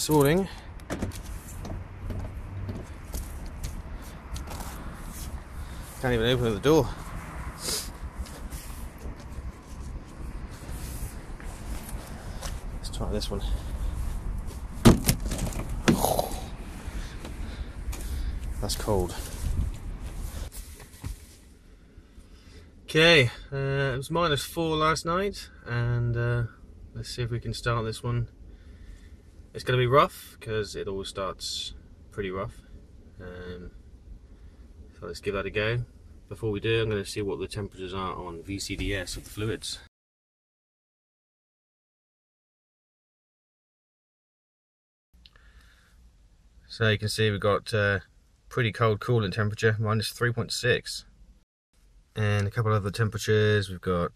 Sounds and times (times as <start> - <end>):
Speech: 0.0 - 0.6, 6.0 - 7.0, 12.8 - 13.6, 18.6 - 19.3, 22.9 - 28.3, 29.6 - 32.6, 33.2 - 33.7, 35.0 - 39.9, 46.7 - 51.1, 52.2 - 54.1
Car: 0.0 - 39.8.